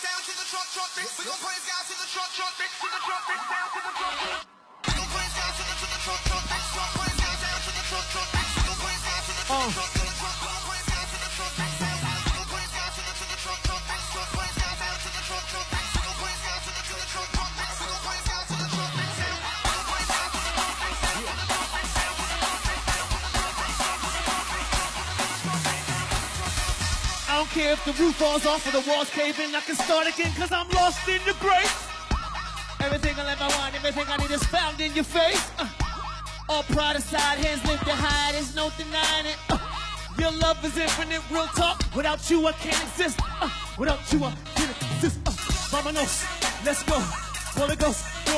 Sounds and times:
Music: 0:00.0 - 0:48.3
Speech: 0:27.3 - 0:29.2.

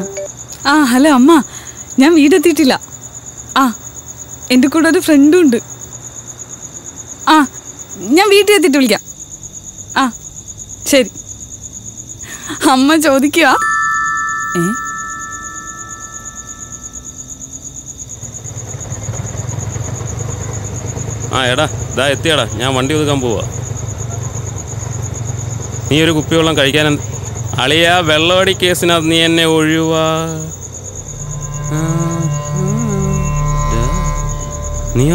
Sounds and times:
Music: 0:13.6 - 0:17.0, 0:31.0 - 0:35.1.

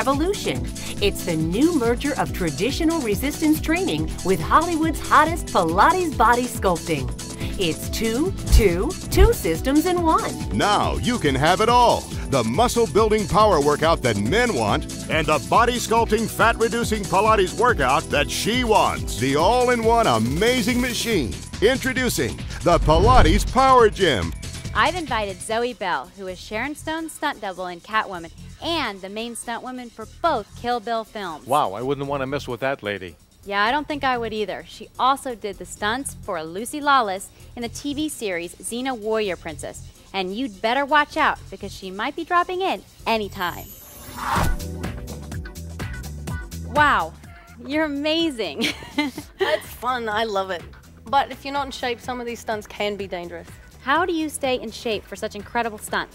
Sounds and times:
Speech: 0:00.0 - 0:43.6, 0:46.7 - 0:48.6, 0:49.5 - 0:56.1
Music: 0:00.0 - 0:56.1.

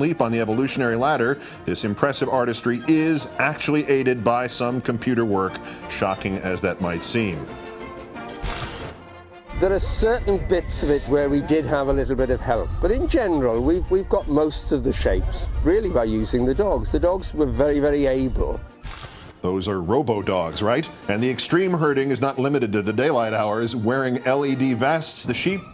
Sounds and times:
Speech: 0:00.0 - 0:07.5, 0:09.6 - 0:18.6, 0:19.5 - 0:25.7
Music: 0:00.0 - 0:25.7.

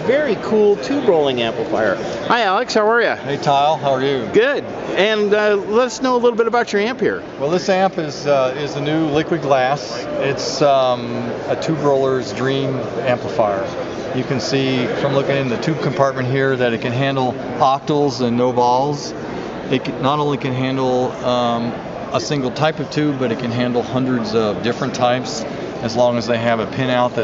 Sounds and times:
Speech: 0:00.0 - 0:27.2.

